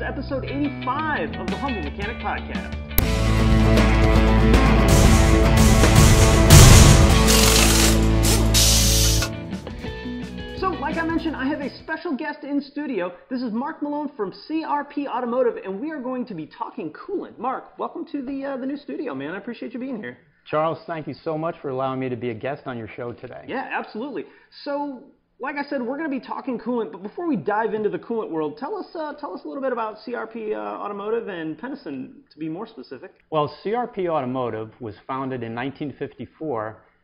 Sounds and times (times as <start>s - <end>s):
Speech: 0.0s - 2.8s, 10.6s - 36.8s.